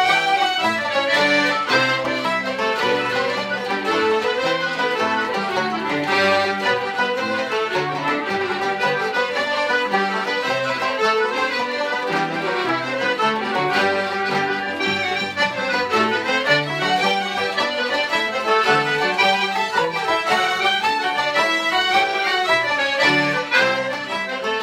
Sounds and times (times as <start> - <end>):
Wind instrument, woodwind instrument: 0.0 - 24.6.